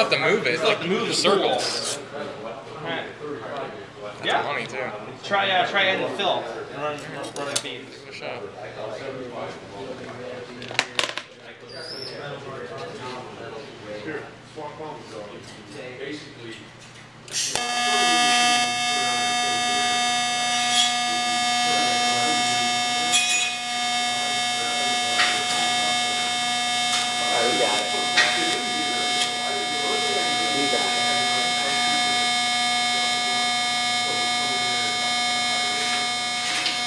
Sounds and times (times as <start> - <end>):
Speech: 0.0 - 16.8, 17.5 - 20.1, 20.8 - 23.4, 24.1 - 26.3, 27.0 - 32.4, 34.0 - 36.7.